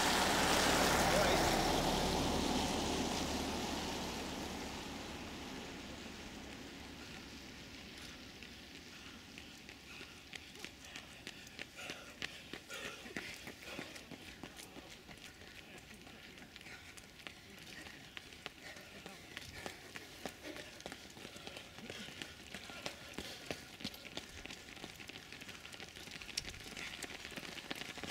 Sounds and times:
Run: 4.8s - 28.1s.

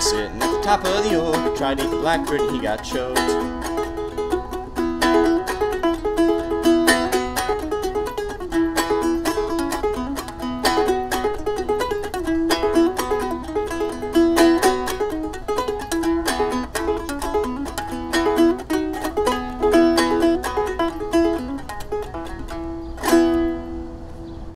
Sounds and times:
Mandolin: 0.0s - 24.5s.

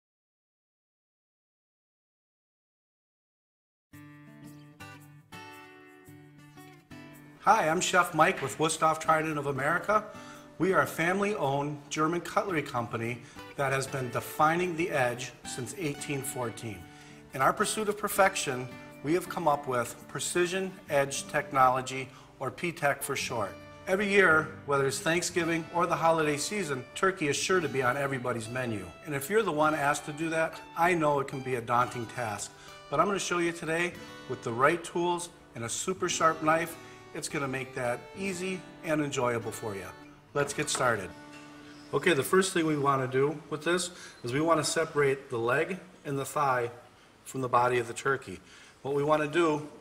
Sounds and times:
Music: 3.9s - 49.8s
Speech: 7.5s - 41.1s, 41.9s - 49.8s.

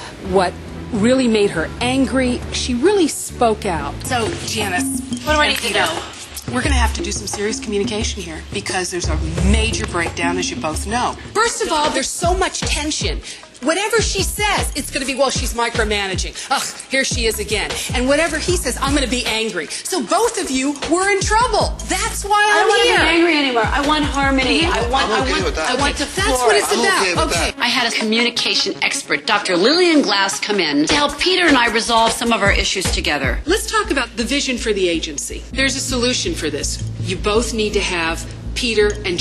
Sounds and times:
Music: 0.0s - 39.2s.

